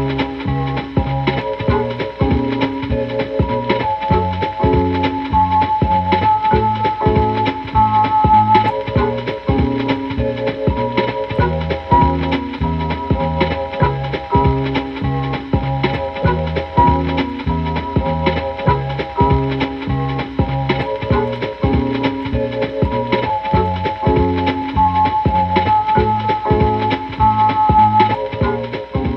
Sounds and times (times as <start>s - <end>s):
Blues: 0.0s - 29.1s.